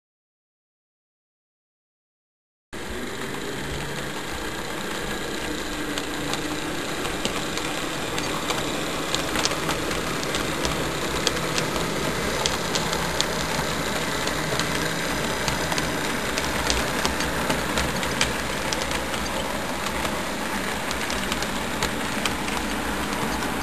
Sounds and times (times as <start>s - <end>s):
Train: 2.8s - 23.6s.